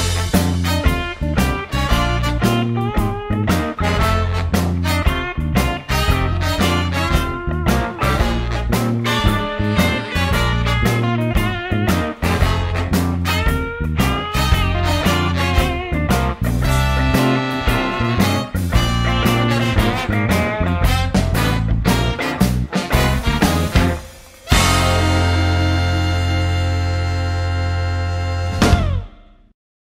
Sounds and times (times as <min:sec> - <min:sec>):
Strum: 0:00.0 - 0:29.4.